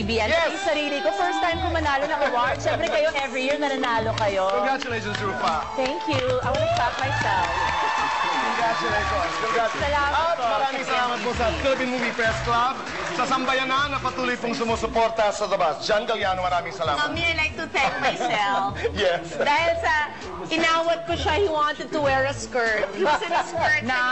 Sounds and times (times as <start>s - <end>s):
Music: 0.0s - 24.1s.